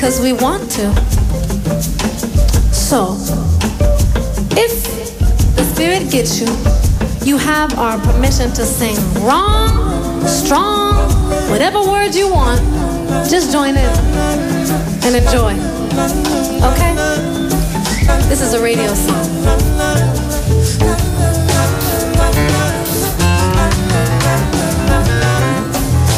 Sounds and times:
Speech: 0.0 - 1.1, 2.8 - 3.4, 4.6 - 6.6, 7.2 - 14.0, 15.0 - 17.2
Music: 0.0 - 26.1.

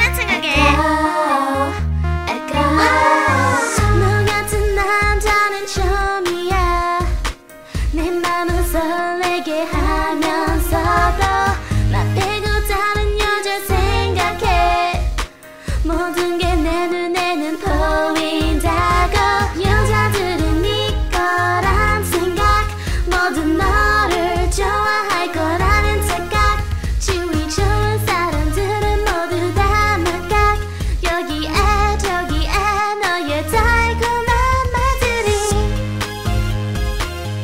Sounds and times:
Music: 0.0 - 37.4.

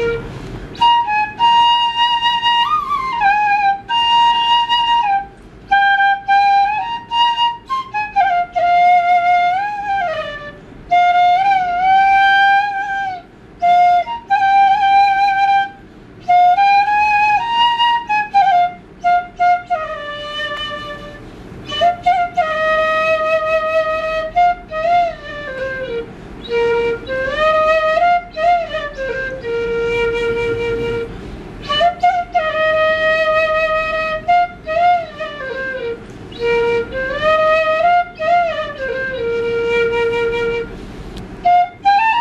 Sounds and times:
Flute: 0.0 - 42.2.

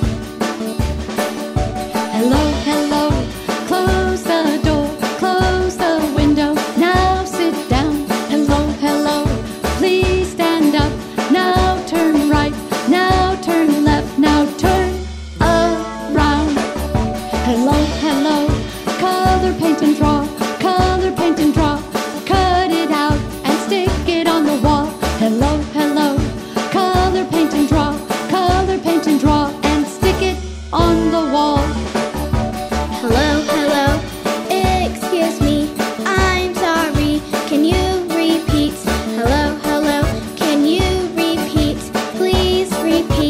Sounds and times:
Jingle (music): 0.0 - 43.2.

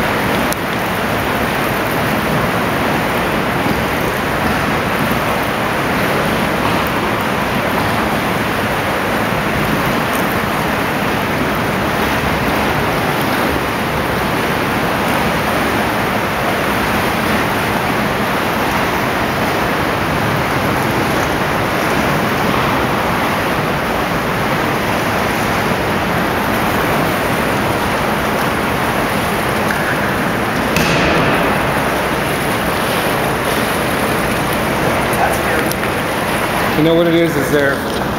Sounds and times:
Waterfall: 0.0 - 38.1
Speech: 35.2 - 35.8, 36.7 - 37.9.

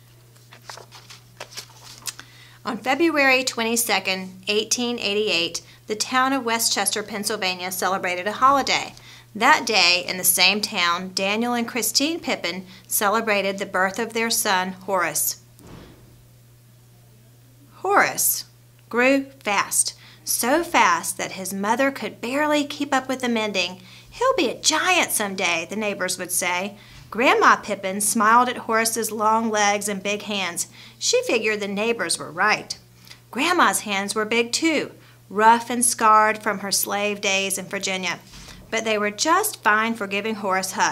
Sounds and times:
Speech: 2.6 - 15.4, 17.1 - 40.9.

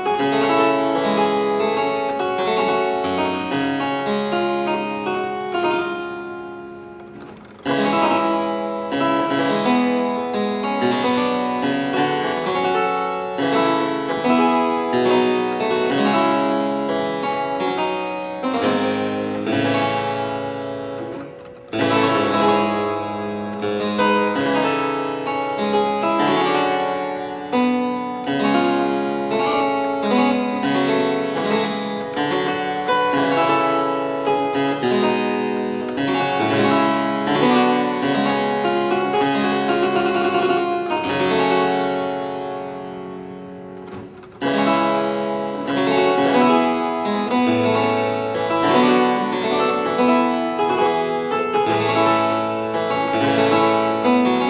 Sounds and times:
Harpsichord: 0.0 - 54.4.

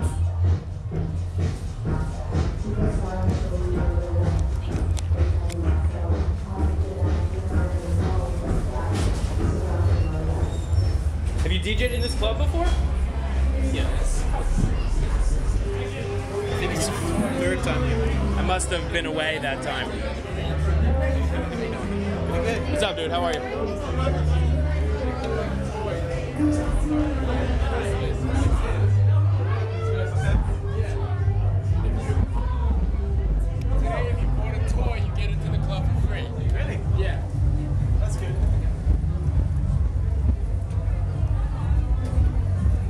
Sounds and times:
Music: 0.0 - 42.8
Speech: 1.9 - 39.0.

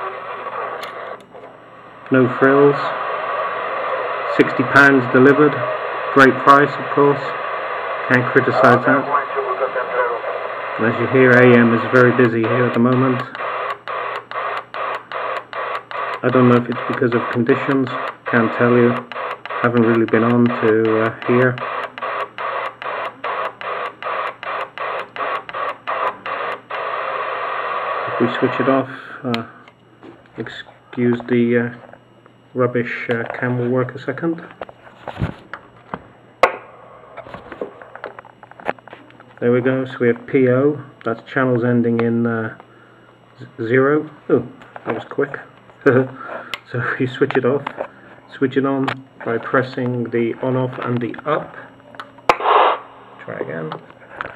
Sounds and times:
Radio: 0.0 - 35.4, 37.0 - 42.7, 43.4 - 54.3
Speech: 2.1 - 3.0, 4.3 - 7.4, 8.1 - 13.4, 16.2 - 21.6, 28.1 - 29.5, 30.4 - 31.8, 32.6 - 34.5, 39.4 - 42.6, 43.4 - 51.7, 53.2 - 53.9
Electronic tuner: 12.0 - 27.4.

